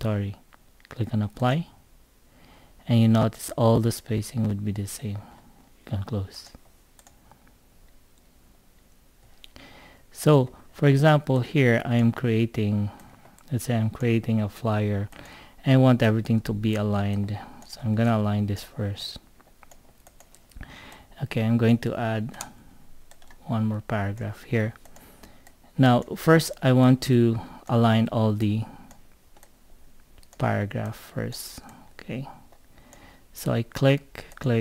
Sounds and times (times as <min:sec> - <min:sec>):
Speech: 0:00.0 - 0:01.8, 0:02.8 - 0:05.3, 0:05.9 - 0:06.6, 0:10.2 - 0:19.3, 0:21.2 - 0:22.5, 0:23.4 - 0:24.8, 0:25.8 - 0:28.8, 0:30.4 - 0:32.4, 0:33.4 - 0:34.6.